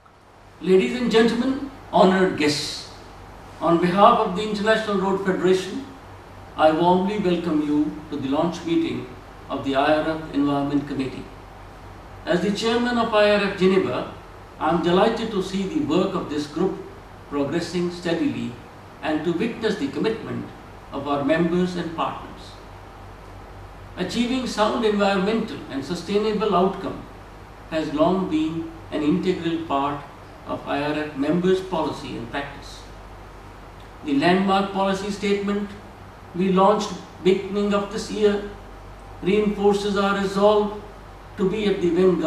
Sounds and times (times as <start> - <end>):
Narration, monologue: 0.0 - 42.2
Male speech, man speaking: 0.6 - 3.0, 3.6 - 5.9, 6.6 - 11.4, 12.3 - 22.6, 24.0 - 27.1, 27.7 - 32.9, 34.0 - 35.8, 36.4 - 38.6, 39.2 - 42.2.